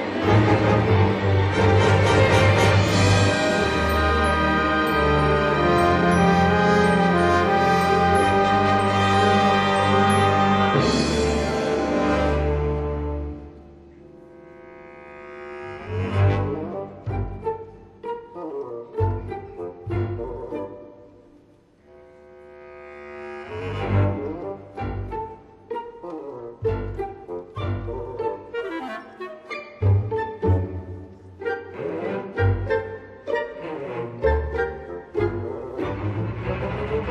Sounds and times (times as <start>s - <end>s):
Orchestra: 0.0s - 37.1s.